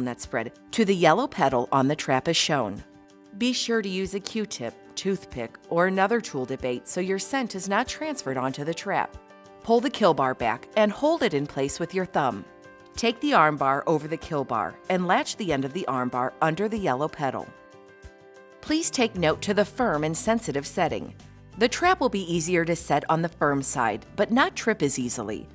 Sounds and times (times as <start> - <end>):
Speech: 0.0 - 2.8, 3.4 - 17.5, 18.6 - 25.5
Music: 0.0 - 25.5.